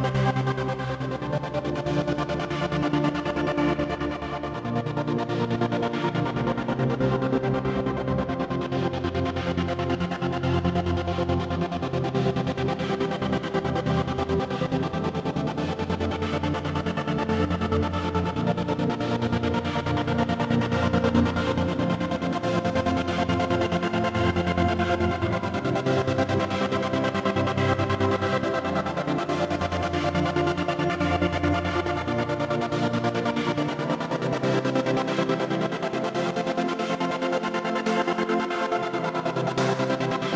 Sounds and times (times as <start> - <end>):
Music: 0.0 - 40.3.